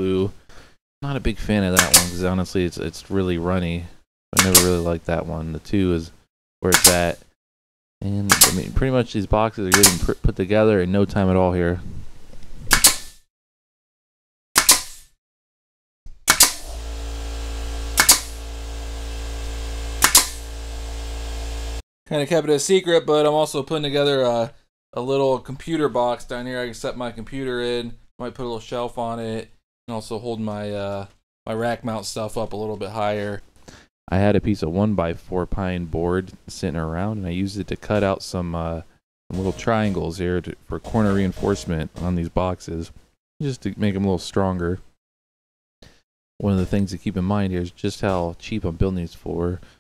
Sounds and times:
Cap gun: 1.8 - 2.2, 4.4 - 4.8, 6.7 - 7.1, 8.3 - 8.7, 9.7 - 10.1, 12.7 - 13.2, 14.6 - 15.1, 16.3 - 16.7, 18.0 - 18.4, 20.0 - 20.4.

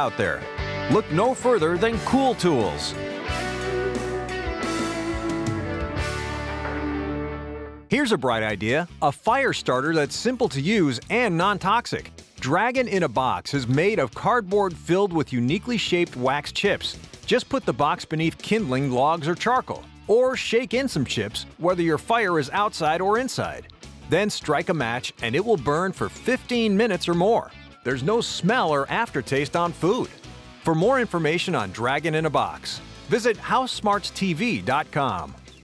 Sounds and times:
Speech: 0.0 - 3.0, 7.9 - 35.4
Music: 0.0 - 35.6.

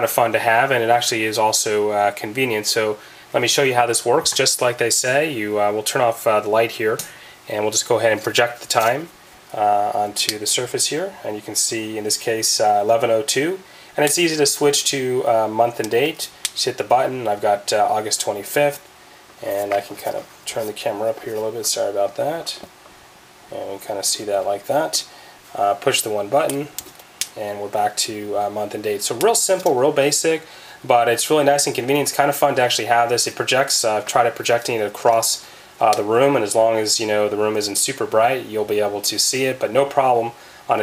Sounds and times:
Speech: 0.0 - 18.8, 19.4 - 22.7, 23.5 - 26.8, 27.4 - 40.8.

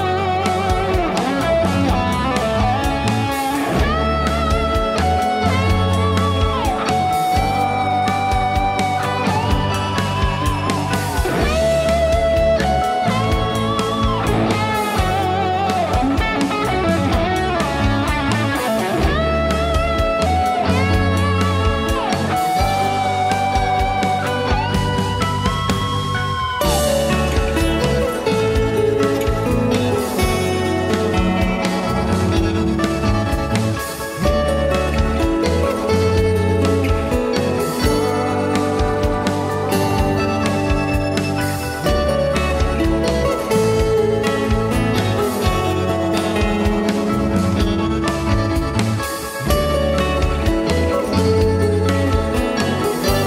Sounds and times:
Electric guitar: 0.0 - 53.2.

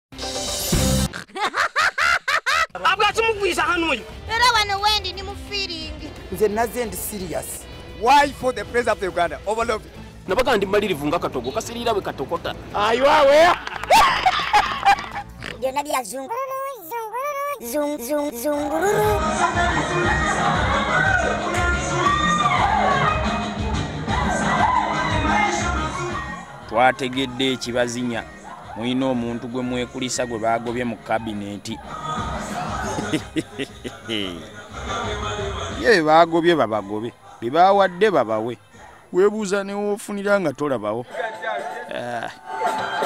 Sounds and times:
Music: 0.1 - 1.2, 2.8 - 16.5, 17.7 - 37.3, 41.1 - 43.0.

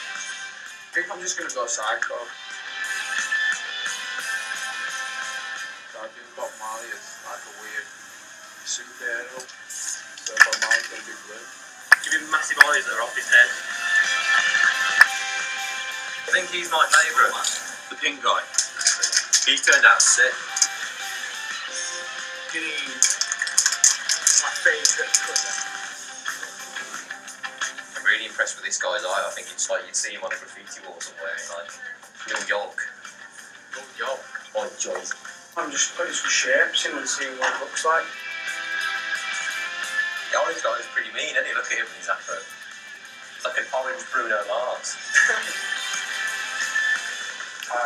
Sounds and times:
Music: 0.0 - 47.8
Speech: 1.0 - 2.3, 6.0 - 7.9, 8.7 - 9.5, 10.3 - 13.6, 16.3 - 20.4, 22.5 - 23.0, 24.3 - 25.5, 28.0 - 32.9, 33.8 - 38.1, 40.3 - 42.5, 43.4 - 45.6.

